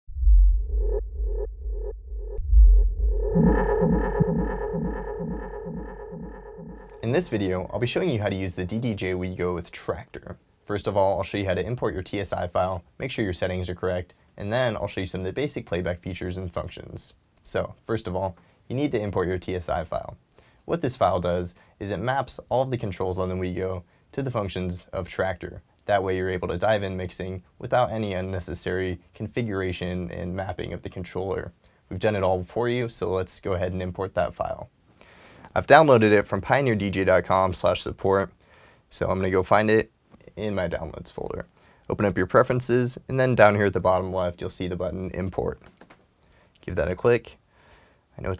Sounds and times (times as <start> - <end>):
Speech: 7.0 - 34.7, 35.5 - 45.7, 46.6 - 47.4, 48.2 - 48.3.